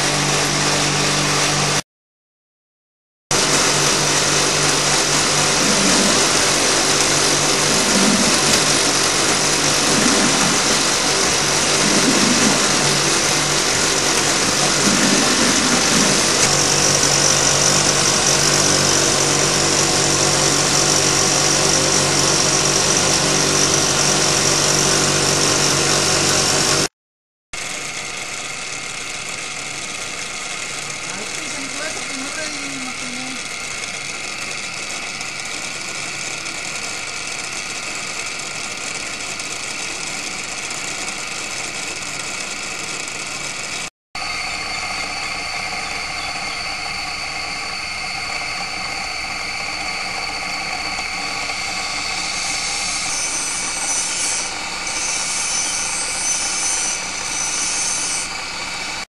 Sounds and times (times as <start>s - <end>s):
Blender: 0.0s - 1.8s, 3.3s - 26.9s, 27.6s - 59.0s.